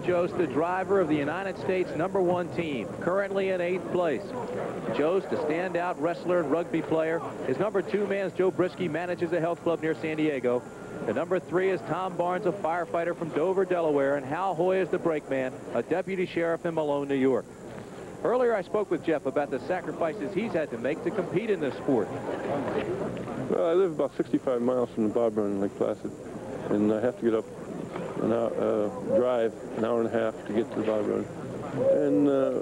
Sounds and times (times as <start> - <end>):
Speech: 0.0 - 17.4, 18.2 - 27.5, 28.2 - 32.6.